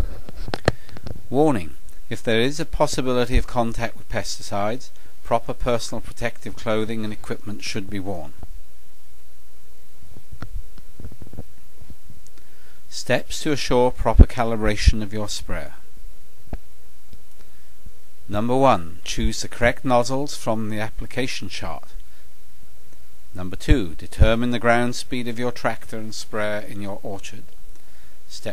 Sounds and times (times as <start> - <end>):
Speech: 1.3 - 8.4, 12.9 - 15.9, 18.3 - 22.0, 23.4 - 27.5, 28.3 - 28.5.